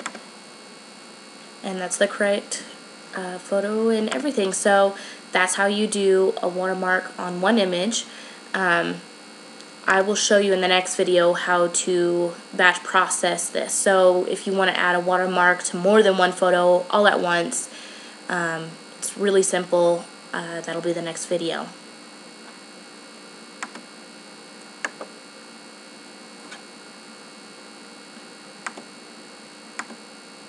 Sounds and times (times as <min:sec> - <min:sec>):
Speech: 0:01.6 - 0:09.0, 0:09.8 - 0:21.8.